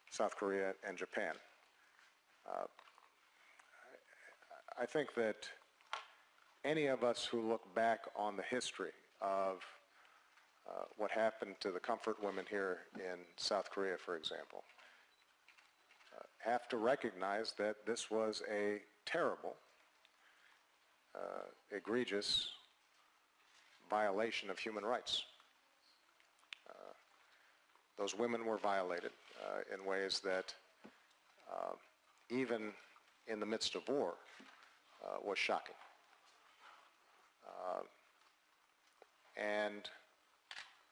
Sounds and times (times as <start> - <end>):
Male speech, man speaking: 0.1 - 1.5, 2.5 - 2.8, 3.9 - 5.6, 6.6 - 9.8, 10.7 - 14.7, 16.2 - 19.6, 21.2 - 22.6, 23.9 - 25.4, 28.0 - 30.6, 31.5 - 34.3, 35.0 - 35.8, 37.4 - 38.0, 39.4 - 40.1.